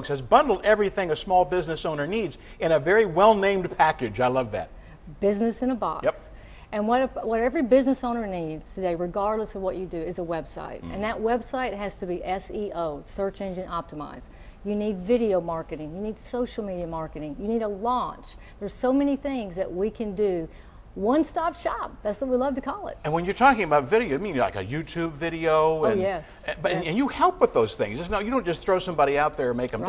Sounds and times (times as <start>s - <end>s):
Conversation: 0.0s - 29.8s.